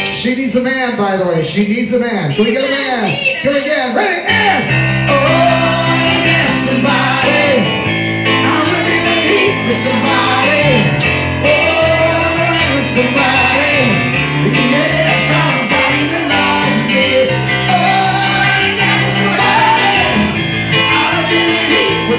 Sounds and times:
Speech: 0.2s - 4.6s
Male singing: 4.3s - 7.8s, 8.4s - 20.2s, 20.8s - 22.1s
Choir: 5.1s - 22.1s.

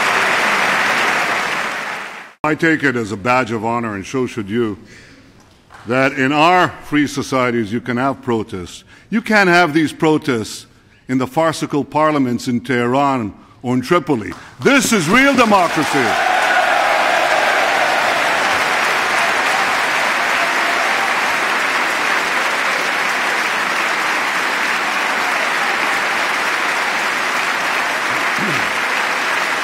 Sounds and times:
Male speech, man speaking: 2.4s - 4.8s, 5.9s - 16.2s
Narration, monologue: 2.4s - 16.2s.

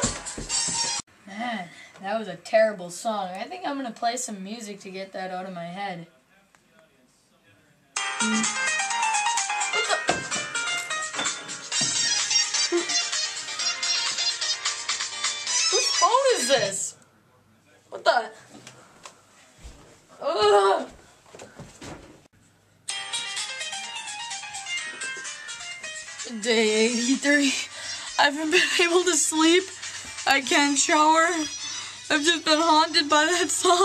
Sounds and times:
Music: 0.0s - 1.0s, 8.0s - 16.7s, 22.9s - 33.8s
Speech: 1.3s - 8.0s, 16.0s - 18.4s
Ringtone: 8.0s - 16.1s, 22.9s - 26.3s, 31.3s - 33.1s.

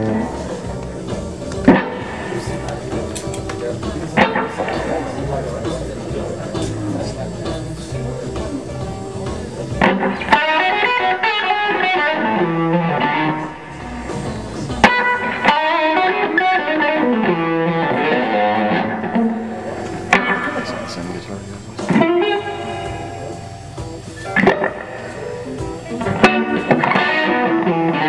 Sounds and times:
Electric guitar: 0.0s - 28.0s.

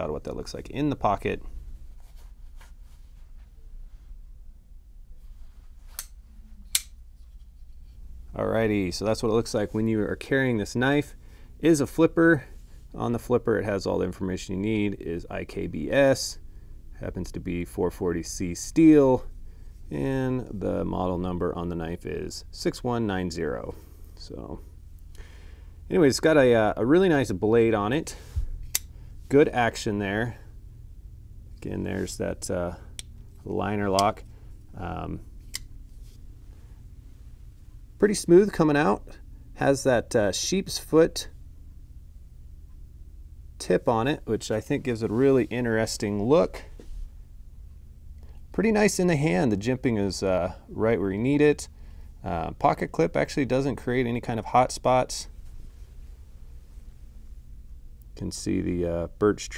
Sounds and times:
Speech: 0.0s - 1.5s, 8.3s - 16.4s, 17.0s - 19.3s, 19.9s - 24.6s, 25.9s - 28.2s, 29.3s - 30.5s, 31.6s - 35.2s, 38.0s - 41.4s, 43.6s - 46.8s, 48.5s - 55.4s, 58.2s - 59.5s
Inside, small room: 0.0s - 59.5s.

